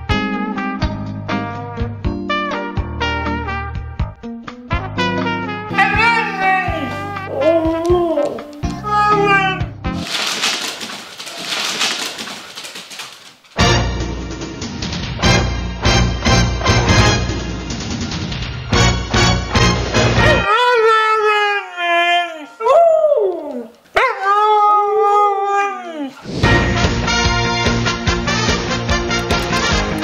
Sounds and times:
Music: 0.0s - 10.1s, 13.6s - 20.5s, 26.4s - 30.0s
Howl: 5.7s - 9.7s, 20.4s - 26.2s.

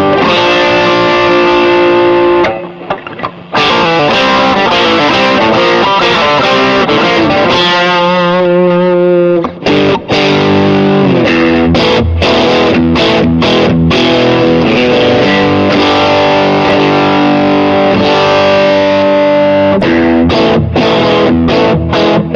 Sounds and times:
Distortion: 0.0s - 22.3s
Guitar: 0.0s - 22.3s.

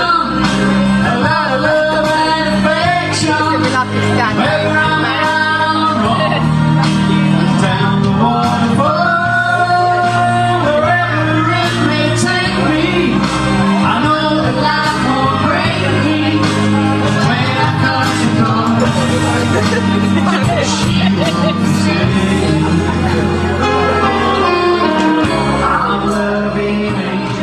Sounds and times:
Music: 0.0s - 27.4s
Singing: 0.0s - 27.4s.

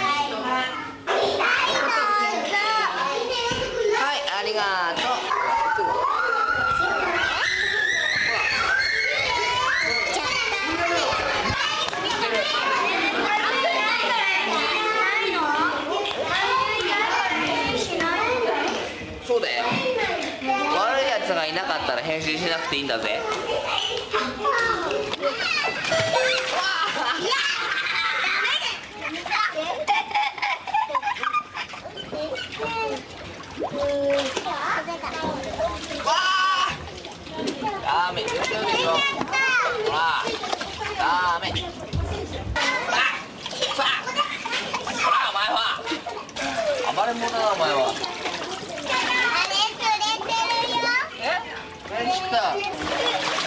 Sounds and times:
Inside, large room or hall: 0.0s - 29.8s, 30.7s - 53.4s
Child speech, kid speaking: 0.0s - 53.4s
Children playing: 0.0s - 53.4s.

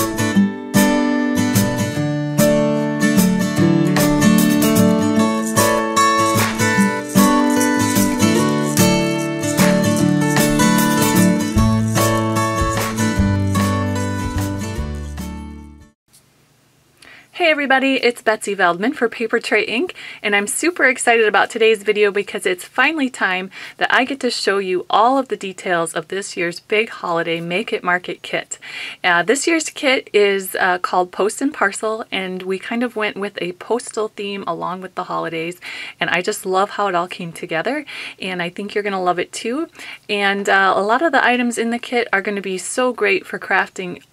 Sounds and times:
Speech: 17.4s - 44.1s.

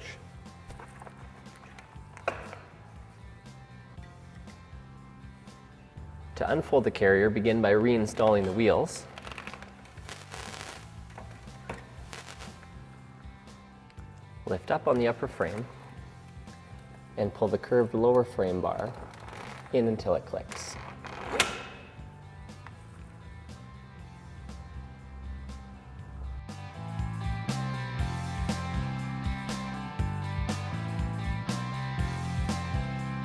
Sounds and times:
Music: 0.0s - 33.2s
Speech: 6.4s - 9.1s, 14.5s - 15.7s, 17.2s - 19.0s, 19.7s - 20.8s.

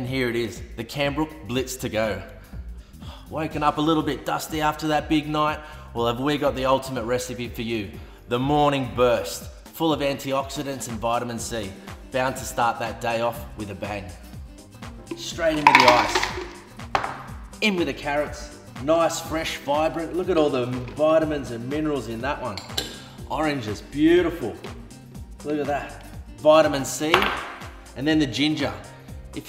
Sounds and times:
Speech: 0.0s - 2.3s, 3.3s - 14.1s, 15.2s - 16.2s, 17.6s - 22.7s, 23.3s - 24.7s, 25.4s - 27.3s, 28.0s - 29.4s
Music: 0.0s - 29.4s.

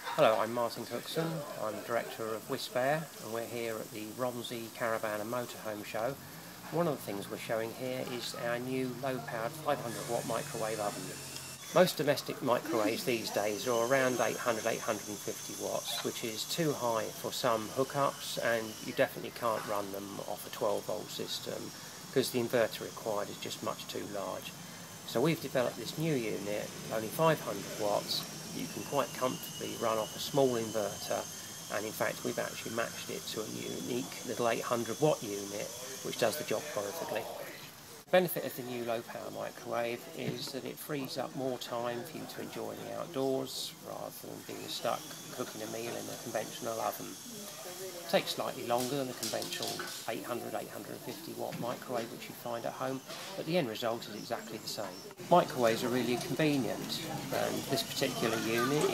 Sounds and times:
Speech: 0.0s - 11.2s, 11.8s - 47.2s, 48.0s - 58.9s.

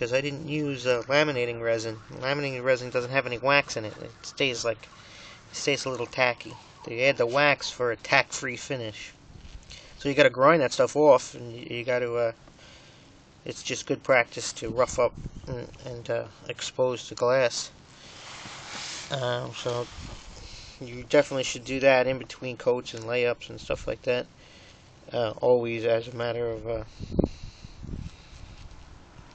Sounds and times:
Speech: 0.0s - 4.9s, 5.5s - 9.2s, 10.0s - 12.4s, 13.5s - 17.7s, 19.1s - 19.9s, 20.8s - 24.3s, 25.1s - 26.9s.

